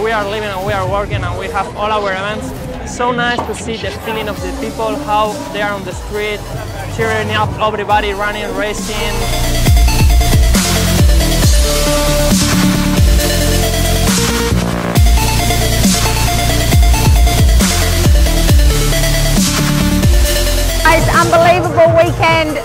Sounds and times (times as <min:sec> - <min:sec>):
Speech: 0:00.0 - 0:09.2, 0:20.9 - 0:22.6
Dubstep: 0:03.0 - 0:22.6.